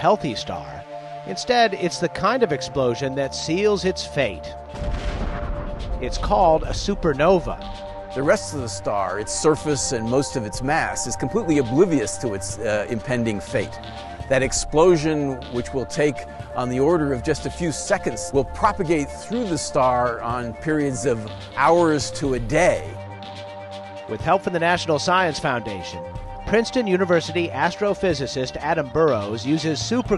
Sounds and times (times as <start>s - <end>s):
Speech: 0.0s - 4.6s, 6.0s - 7.6s, 8.2s - 23.0s, 24.1s - 30.1s
Music: 0.0s - 30.1s.